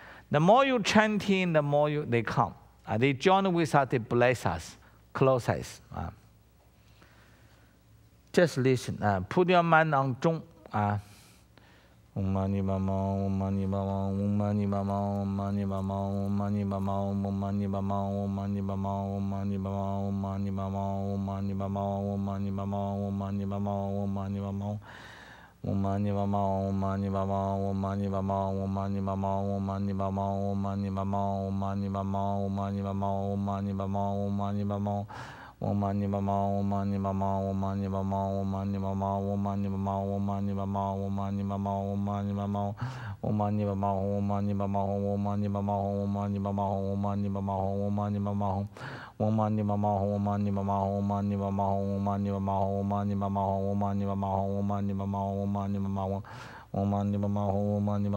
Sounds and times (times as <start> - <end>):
Speech: 0.3 - 6.2, 8.3 - 11.1.